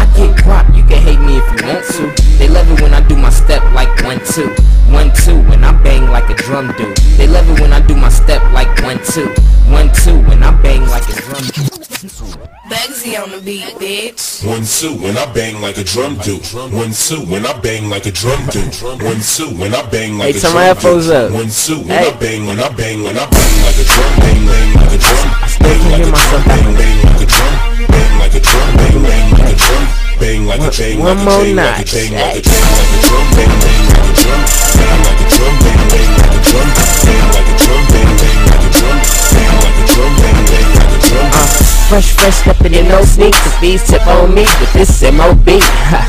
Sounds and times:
Drum: 23.3 - 29.8, 32.3 - 46.0
Drum kit: 23.4 - 29.8, 32.5 - 46.0.

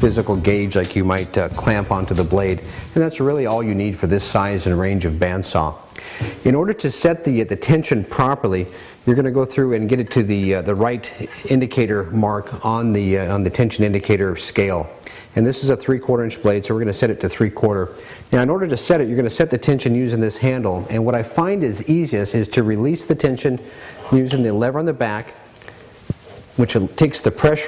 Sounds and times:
Speech: 0.0 - 5.8, 6.4 - 25.4, 26.6 - 27.6.

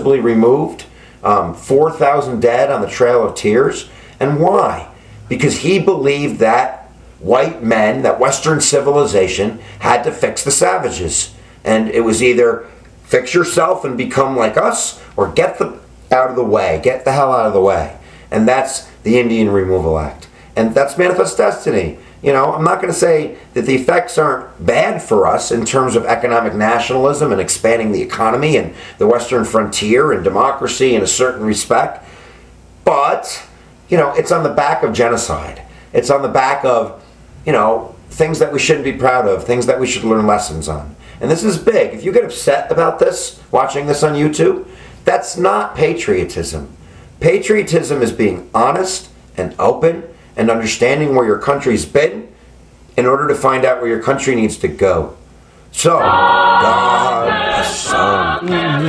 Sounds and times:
Speech: 0.0 - 32.1, 32.8 - 52.4, 53.0 - 58.8.

